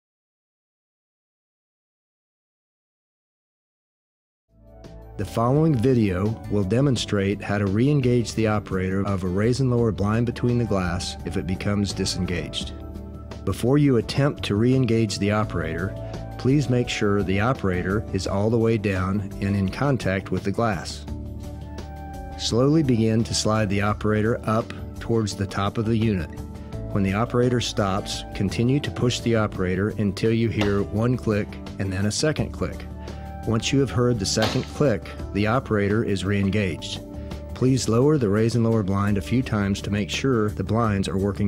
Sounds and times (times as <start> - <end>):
Music: 4.5 - 41.4
Speech: 5.2 - 12.8, 13.4 - 21.1, 22.4 - 37.0, 37.6 - 41.4.